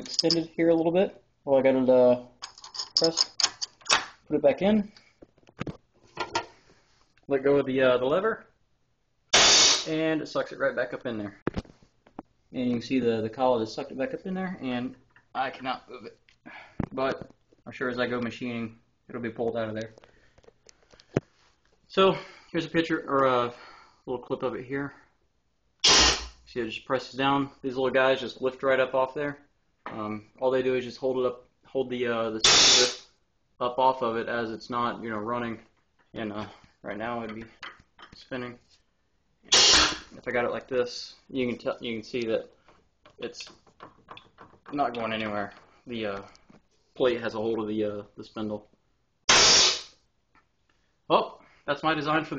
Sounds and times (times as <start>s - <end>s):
Speech: 0.2s - 2.3s, 4.3s - 5.0s, 7.3s - 8.5s, 9.9s - 11.4s, 12.5s - 16.2s, 16.9s - 20.0s, 21.9s - 25.0s, 26.5s - 32.5s, 33.6s - 37.6s, 38.2s - 38.6s, 40.2s - 42.5s, 44.7s - 46.3s, 47.0s - 48.7s, 51.1s - 52.3s.